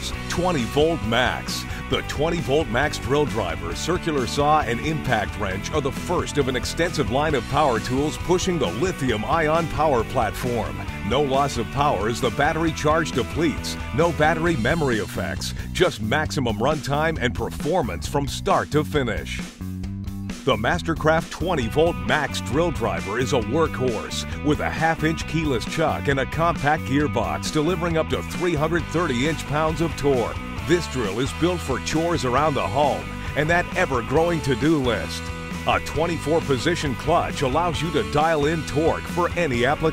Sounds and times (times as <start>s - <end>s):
Speech: 0.0s - 19.5s, 20.5s - 39.9s
Music: 0.0s - 39.9s.